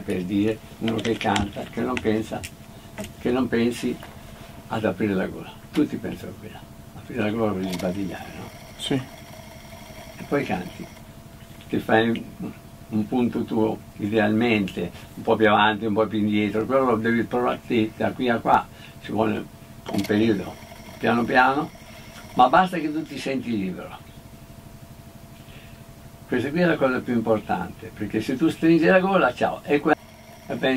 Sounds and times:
Speech: 0.0 - 2.5, 3.1 - 4.1, 4.7 - 9.1, 10.2 - 10.9, 11.6 - 21.7, 22.4 - 24.0, 26.3 - 30.7.

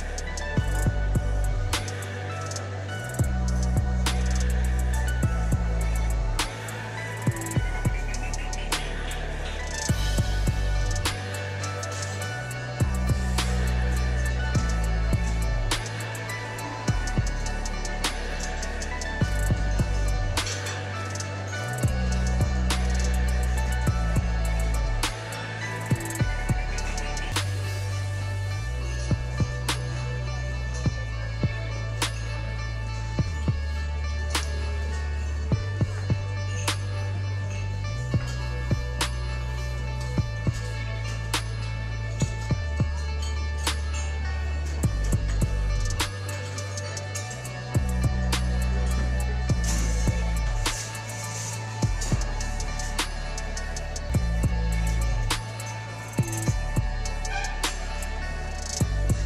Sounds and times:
Music: 0.0 - 59.2.

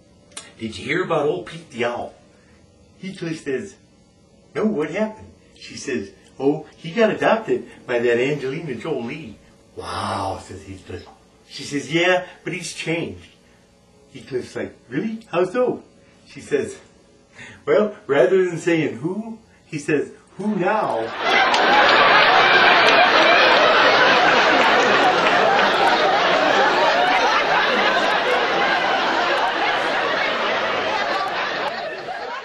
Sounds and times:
Speech: 0.4 - 2.2, 3.0 - 3.8, 4.5 - 13.4, 14.1 - 16.9, 17.6 - 21.1.

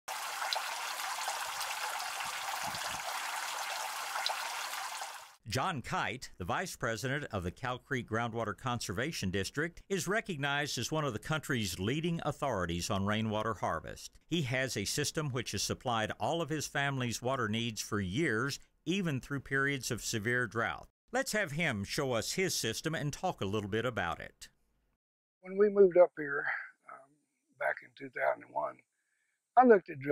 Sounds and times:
Water: 0.1 - 5.4
Speech: 5.5 - 24.5, 25.4 - 27.0, 27.6 - 28.8, 29.6 - 30.1.

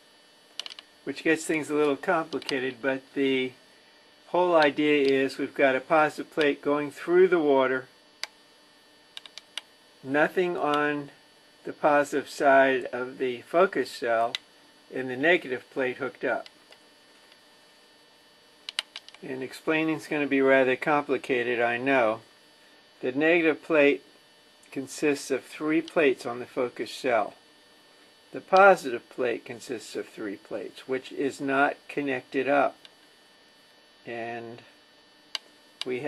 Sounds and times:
Speech: 1.1 - 3.6, 4.3 - 7.9, 10.0 - 16.5, 19.2 - 22.2, 23.0 - 24.1, 24.7 - 27.4, 28.3 - 32.8, 34.1 - 34.7, 35.8 - 36.0.

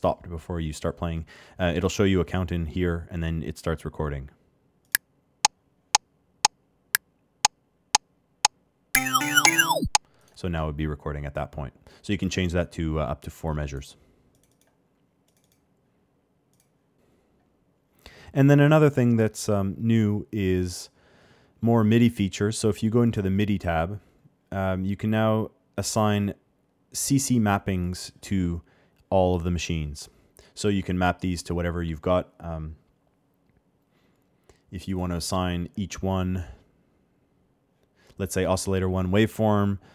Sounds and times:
Synthesizer: 9.0 - 10.0.

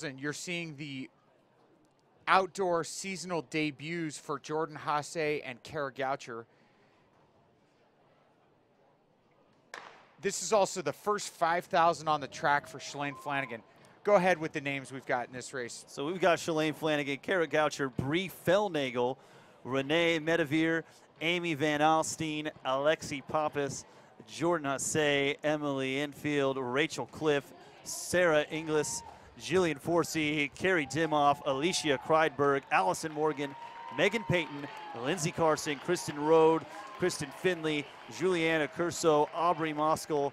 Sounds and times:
Speech: 0.0 - 1.1, 2.2 - 6.5, 10.2 - 40.3
Inside, public space: 0.0 - 40.3.

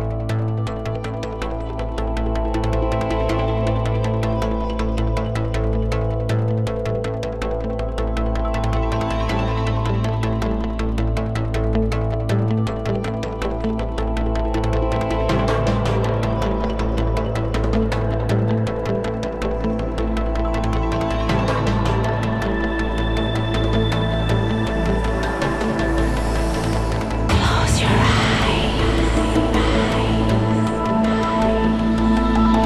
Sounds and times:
Music: 0.0 - 32.6.

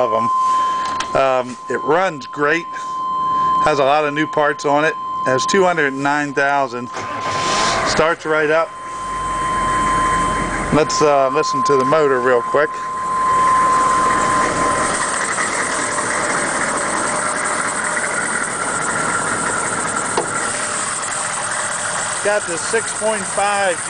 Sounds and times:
Speech: 0.0 - 0.3, 1.2 - 2.7, 3.6 - 7.0, 7.9 - 8.7, 10.7 - 12.9, 22.2 - 23.9
Vehicle: 5.2 - 23.9.

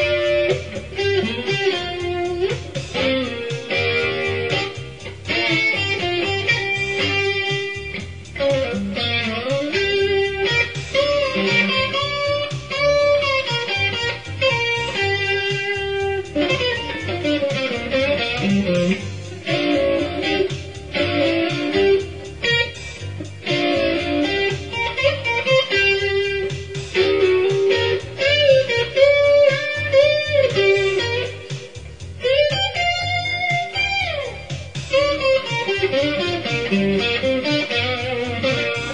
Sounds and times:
Music: 0.0 - 38.9.

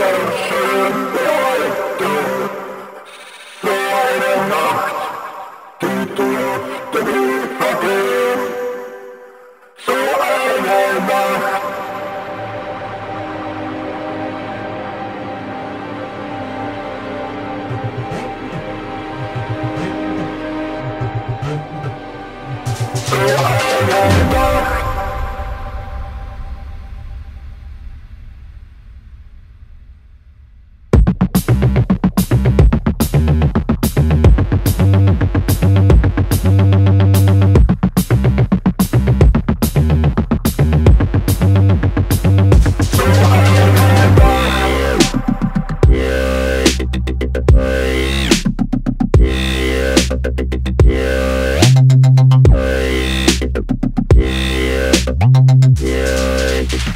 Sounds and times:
Dubstep: 16.2 - 25.8, 31.0 - 56.9.

